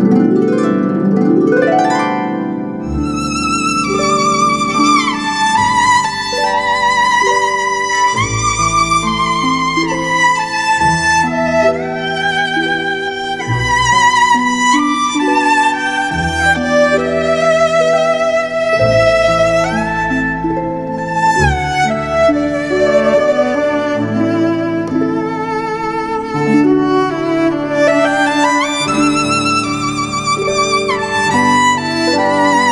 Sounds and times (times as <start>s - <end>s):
Music: 0.0s - 32.7s.